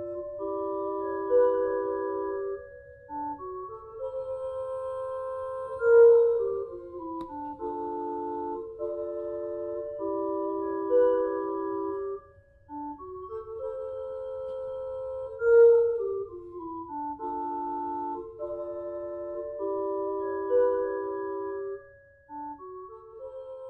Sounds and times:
Musical instrument: 0.0 - 23.7.

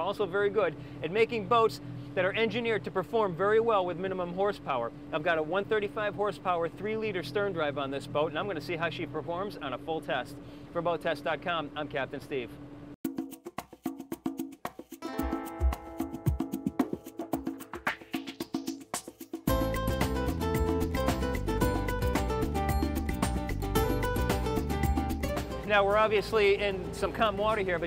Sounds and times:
Music: 13.0 - 27.8.

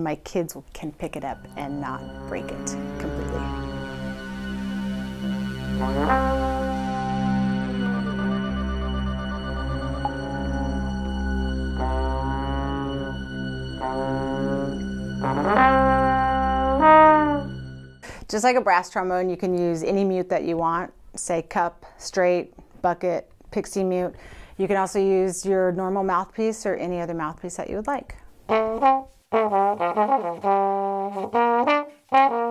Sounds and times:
Music: 0.6 - 20.0, 28.5 - 32.5.

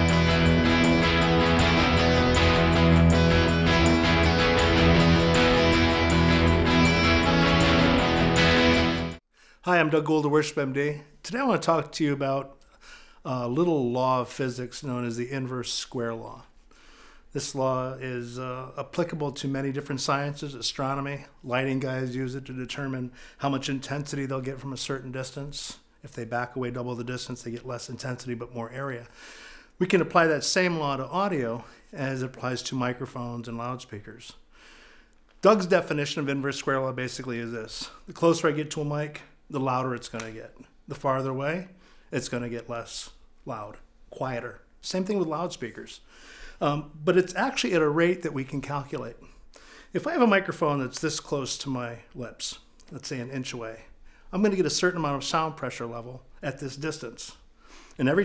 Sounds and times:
Speech: 9.6 - 12.6, 13.2 - 16.5, 17.3 - 29.1, 29.8 - 34.4, 35.4 - 46.0, 46.6 - 49.3, 49.9 - 57.4, 58.0 - 58.2.

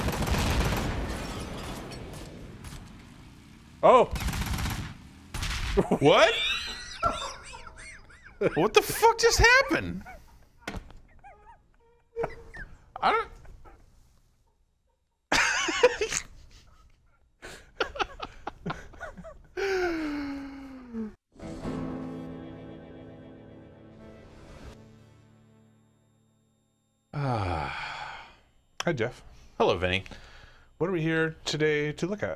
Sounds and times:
Music: 21.3 - 26.3
Speech: 28.8 - 30.1, 30.8 - 32.3.

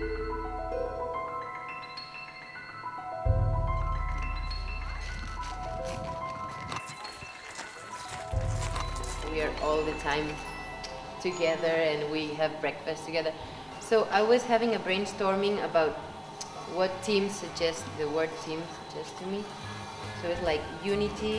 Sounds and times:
Music: 0.0 - 21.3.

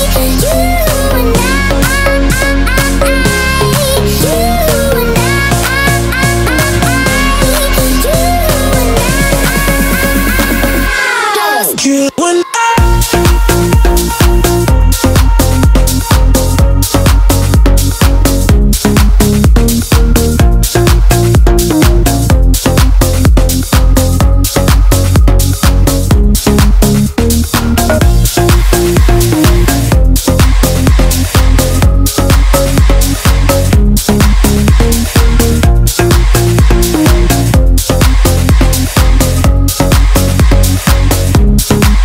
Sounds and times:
Dance music: 0.0 - 42.0.

